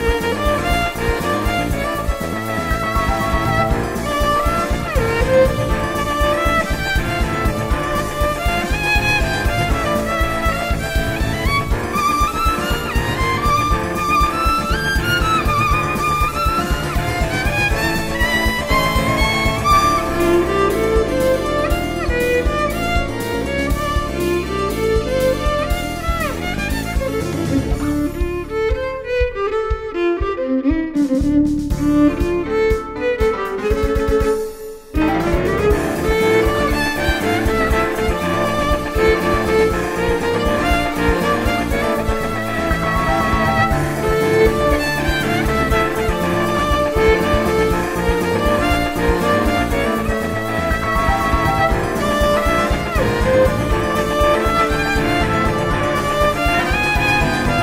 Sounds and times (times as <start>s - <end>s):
Violin, fiddle: 0.0s - 57.6s.